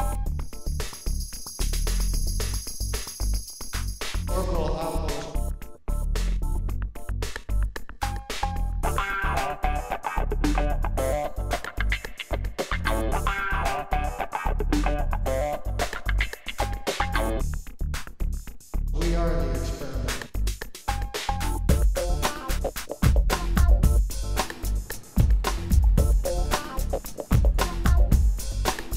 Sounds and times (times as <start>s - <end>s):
Music: 0.0s - 28.9s
Speech: 4.3s - 5.4s, 19.0s - 20.3s.